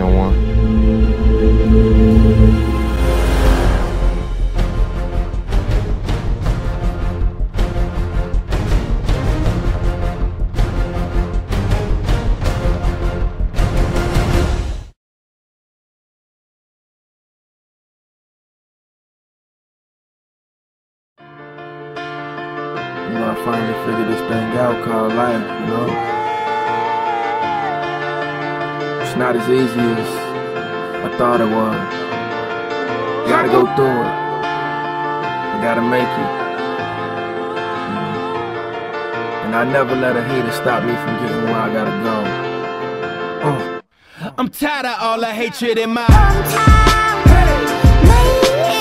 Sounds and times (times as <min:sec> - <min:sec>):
Music: 0:00.0 - 0:15.0, 0:21.2 - 0:43.9, 0:44.8 - 0:48.8.